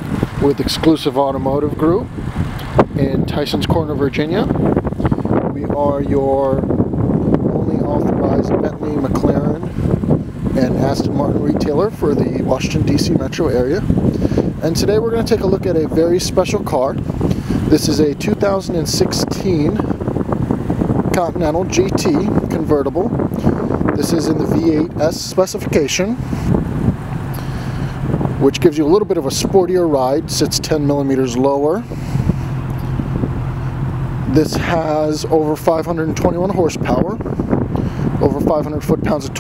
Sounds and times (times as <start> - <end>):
Speech: 0.4 - 2.1, 3.0 - 4.6, 5.5 - 6.6, 7.6 - 9.7, 10.6 - 13.8, 14.6 - 17.0, 17.7 - 19.8, 21.1 - 23.1, 24.0 - 26.2, 28.4 - 31.9, 34.3 - 37.2, 38.2 - 39.4.